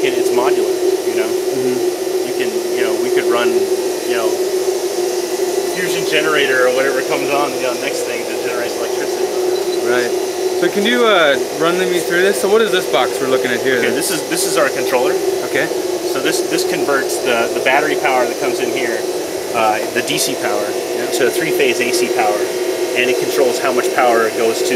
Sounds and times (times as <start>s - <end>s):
Speech: 0.0s - 4.4s, 5.7s - 24.7s.